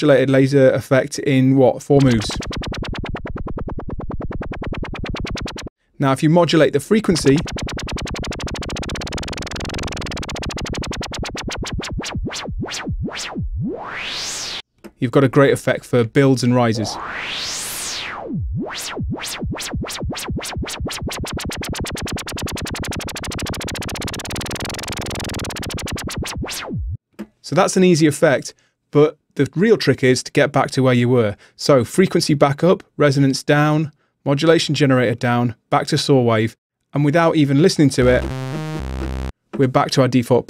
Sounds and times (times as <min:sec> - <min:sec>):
Speech: 0:00.0 - 0:02.4, 0:06.0 - 0:07.5, 0:15.0 - 0:17.0, 0:27.4 - 0:38.3, 0:39.6 - 0:40.5.